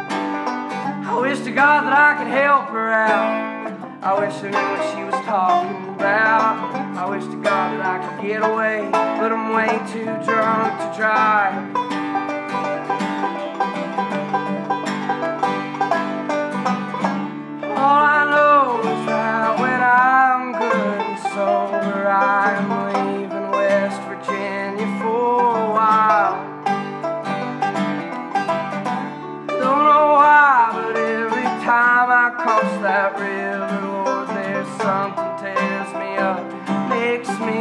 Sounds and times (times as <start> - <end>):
Acoustic guitar: 0.0 - 37.6
Banjo: 0.0 - 37.6
Country: 0.0 - 37.6.